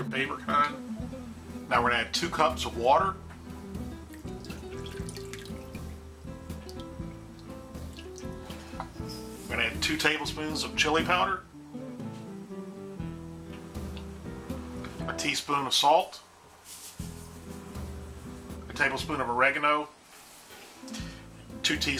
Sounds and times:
Frying (food): 0:03.4 - 0:09.5
Water: 0:03.9 - 0:08.6.

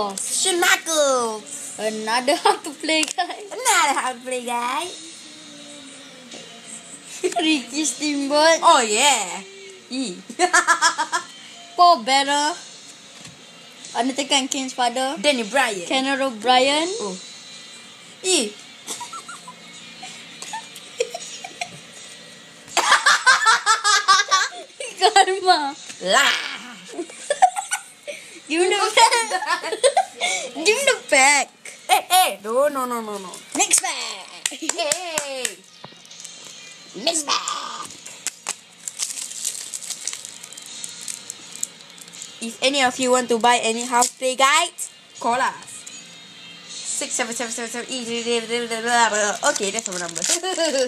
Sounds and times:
Music: 0:00.0 - 0:50.8.

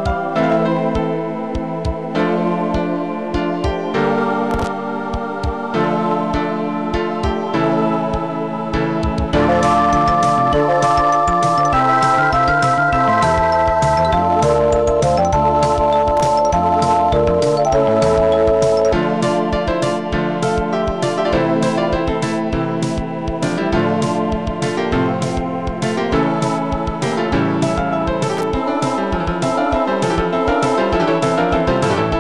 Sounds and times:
Music: 0:00.0 - 0:32.2.

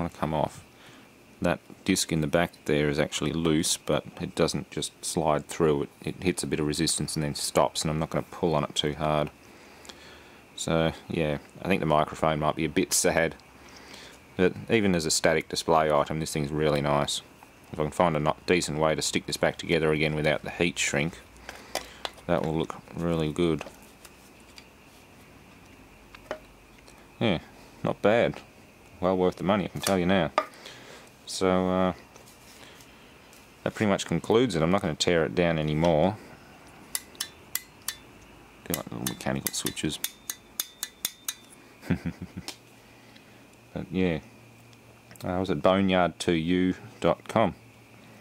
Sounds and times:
Speech: 0:00.0 - 0:00.6, 0:01.4 - 0:09.3, 0:10.6 - 0:13.4, 0:14.4 - 0:21.2, 0:22.3 - 0:23.7, 0:27.2 - 0:28.4, 0:29.0 - 0:30.4, 0:31.3 - 0:32.0, 0:33.6 - 0:36.3, 0:38.7 - 0:40.0, 0:43.7 - 0:44.3, 0:45.2 - 0:47.6
Inside, small room: 0:00.0 - 0:48.2.

